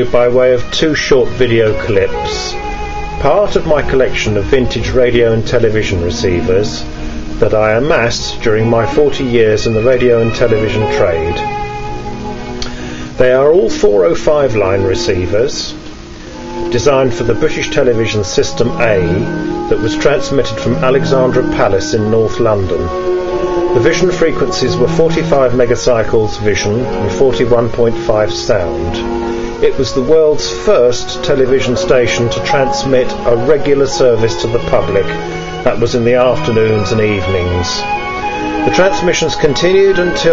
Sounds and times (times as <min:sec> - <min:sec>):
Speech: 0:00.0 - 0:02.6, 0:03.2 - 0:11.5, 0:13.2 - 0:15.8, 0:16.7 - 0:22.9, 0:23.8 - 0:37.9, 0:38.7 - 0:40.3
Music: 0:00.0 - 0:40.3.